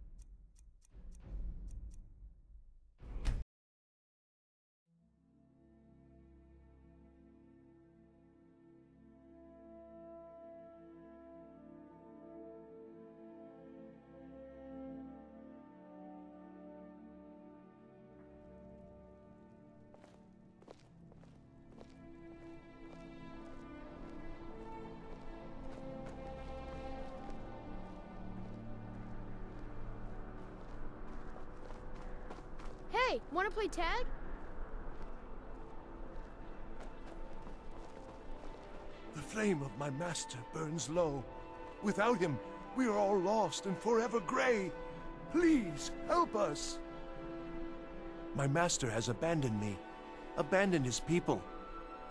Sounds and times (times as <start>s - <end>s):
Music: 0.0s - 3.4s, 4.9s - 52.1s.